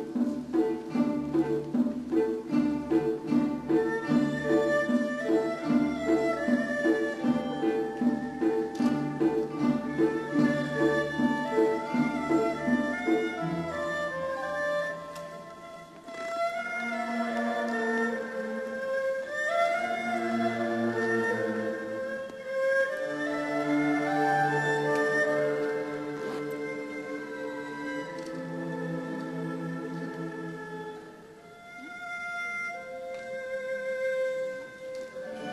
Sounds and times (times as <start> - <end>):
Orchestra: 0.0 - 35.5.